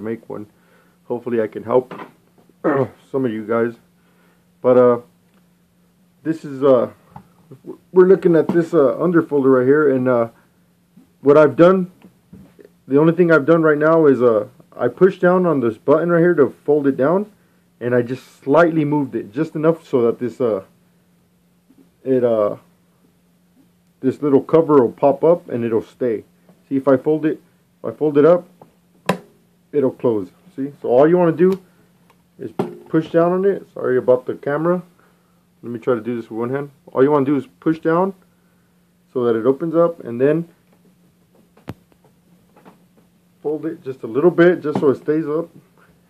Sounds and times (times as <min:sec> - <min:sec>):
Speech: 0:00.0 - 0:00.5, 0:01.1 - 0:02.0, 0:02.7 - 0:03.9, 0:04.6 - 0:05.1, 0:06.2 - 0:10.4, 0:11.2 - 0:12.0, 0:12.6 - 0:20.7, 0:22.0 - 0:22.7, 0:24.0 - 0:28.5, 0:29.7 - 0:31.6, 0:32.4 - 0:34.9, 0:35.6 - 0:38.2, 0:39.1 - 0:40.6, 0:43.4 - 0:45.6.